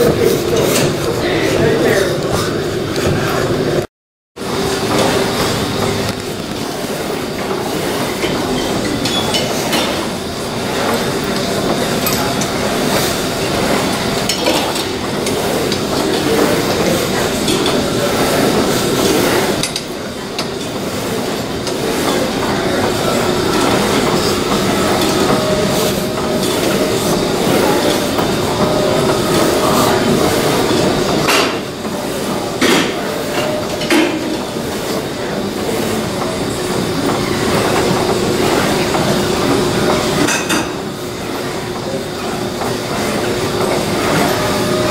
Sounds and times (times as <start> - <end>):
Inside, large room or hall: 0.0 - 44.9.